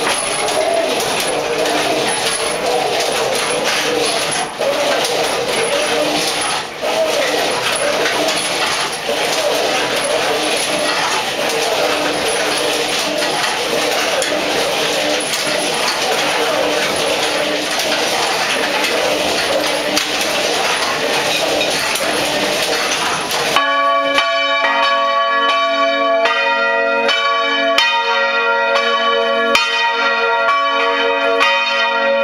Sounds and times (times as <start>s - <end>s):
Bell: 0.0s - 32.2s.